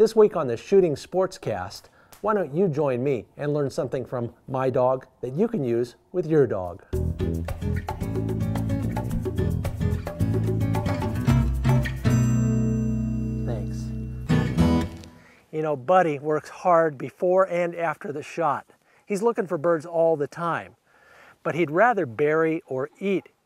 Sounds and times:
Speech: 0:00.0 - 0:06.8, 0:13.4 - 0:13.9, 0:15.5 - 0:20.8, 0:21.4 - 0:23.4
Music: 0:06.9 - 0:15.3.

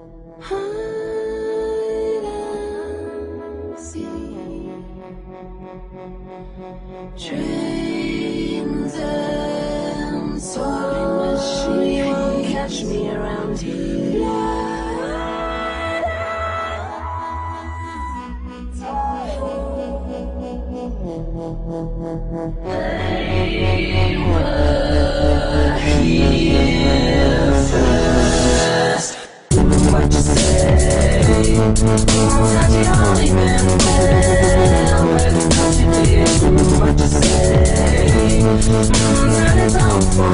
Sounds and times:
Music: 0:00.0 - 0:40.3.

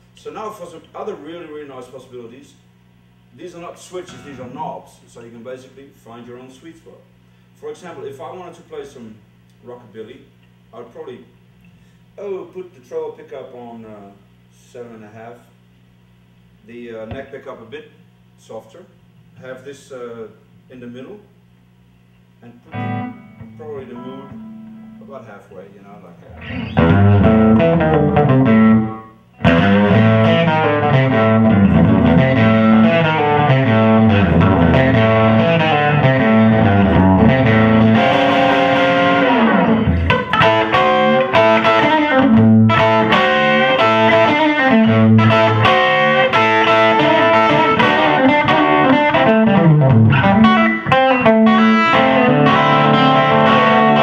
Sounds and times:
Speech: 0:00.2 - 0:02.6, 0:03.3 - 0:11.4, 0:12.2 - 0:15.6, 0:16.6 - 0:21.3, 0:22.4 - 0:22.8, 0:23.5 - 0:24.3, 0:25.0 - 0:26.3
Music: 0:22.7 - 0:25.3, 0:26.2 - 0:54.0.

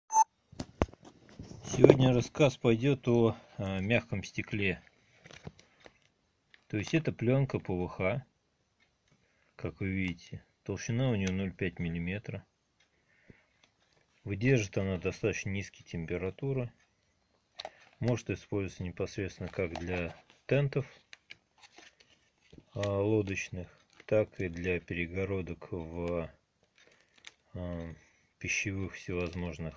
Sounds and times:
Speech: 0:01.6 - 0:04.9, 0:06.7 - 0:08.3, 0:09.6 - 0:12.5, 0:14.2 - 0:16.8, 0:18.0 - 0:21.0, 0:22.7 - 0:26.4, 0:27.5 - 0:29.7.

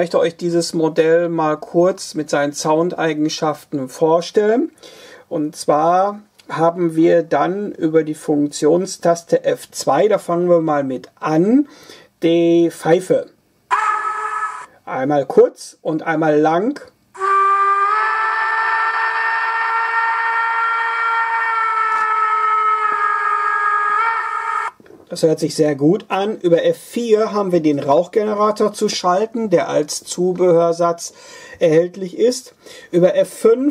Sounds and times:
Speech: 0:00.0 - 0:13.4, 0:14.8 - 0:17.0, 0:25.1 - 0:33.7.

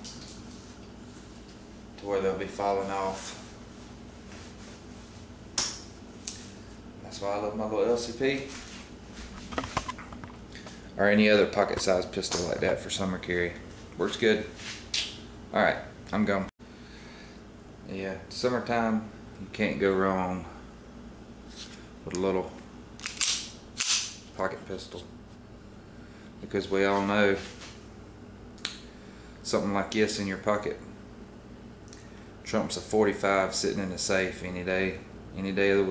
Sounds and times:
Speech: 0:02.0 - 0:03.4, 0:07.0 - 0:08.6, 0:11.0 - 0:14.6, 0:15.5 - 0:16.5, 0:17.9 - 0:20.6, 0:22.0 - 0:22.6, 0:24.4 - 0:25.1, 0:26.4 - 0:27.5, 0:29.4 - 0:30.8, 0:32.5 - 0:35.9.

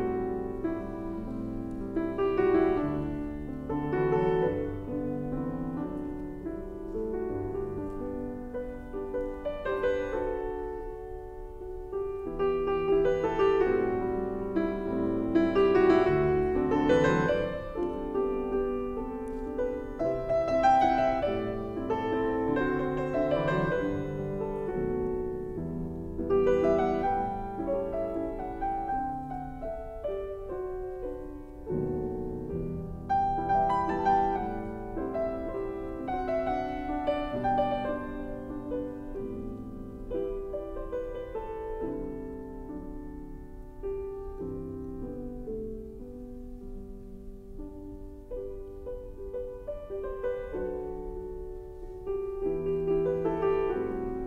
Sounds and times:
Piano: 0:00.0 - 0:54.2.

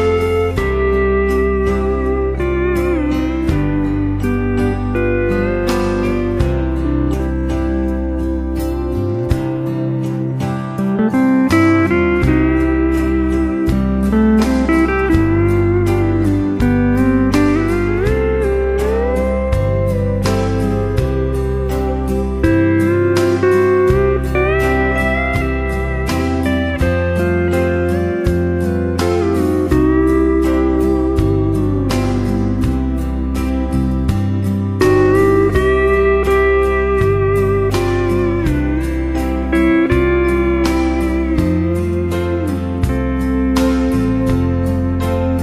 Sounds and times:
Steel guitar, slide guitar: 0:00.0 - 0:45.4.

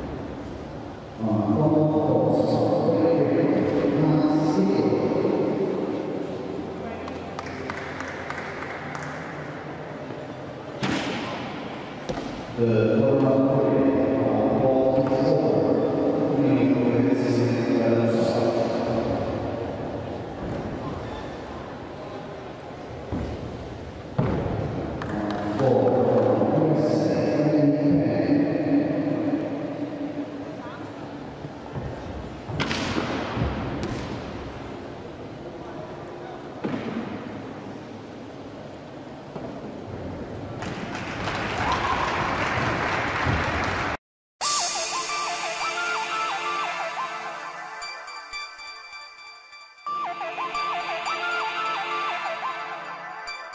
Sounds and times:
Speech: 0:01.2 - 0:05.3, 0:12.6 - 0:19.0, 0:25.1 - 0:29.2.

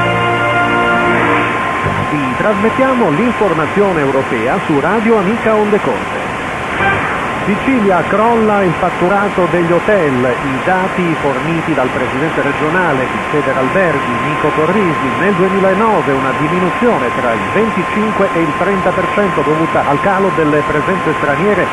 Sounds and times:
Radio: 0:02.1 - 0:06.3, 0:07.4 - 0:21.7
Speech: 0:02.1 - 0:06.3, 0:07.5 - 0:21.7.

